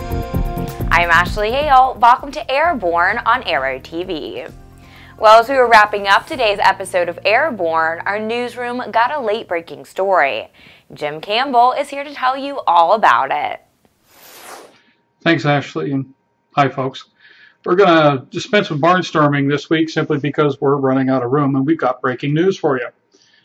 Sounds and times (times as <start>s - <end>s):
Speech: 0.9s - 4.5s, 5.2s - 13.6s, 15.3s - 17.1s, 17.7s - 22.9s.